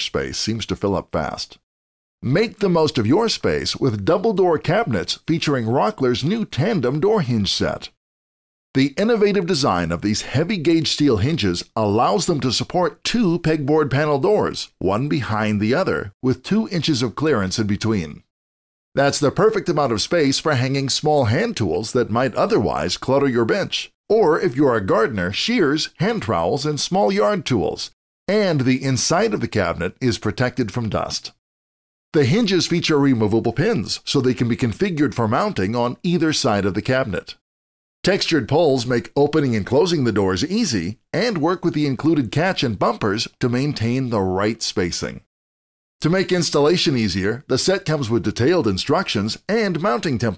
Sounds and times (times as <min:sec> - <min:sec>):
Speech: 0:00.0 - 0:01.6, 0:02.2 - 0:08.0, 0:08.8 - 0:18.3, 0:19.0 - 0:31.4, 0:32.2 - 0:37.4, 0:38.0 - 0:45.3, 0:46.0 - 0:50.3.